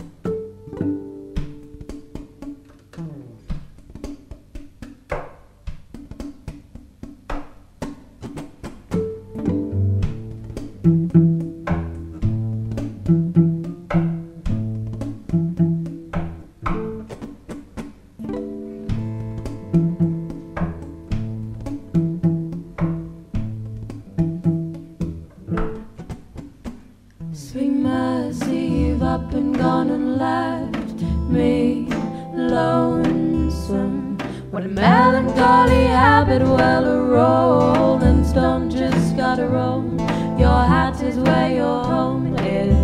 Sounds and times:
Music: 0:00.0 - 0:42.8.

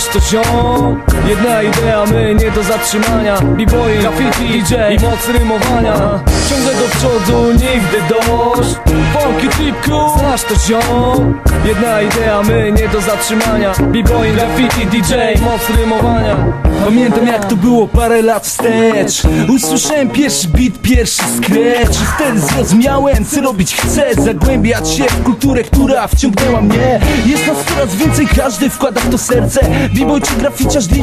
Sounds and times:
Funk: 0:00.0 - 0:31.0
Hip hop music: 0:00.0 - 0:31.0
Rapping: 0:00.0 - 0:31.0.

